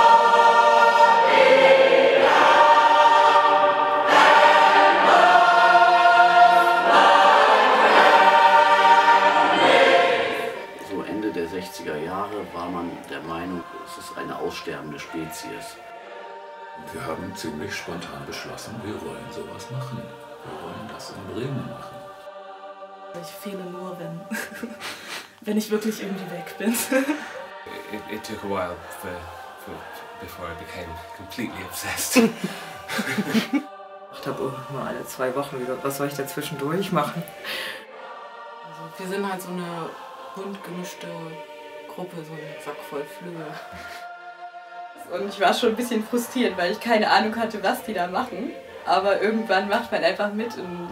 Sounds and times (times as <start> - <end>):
Music: 0.0 - 50.9
Speech: 16.8 - 21.8, 45.1 - 50.9.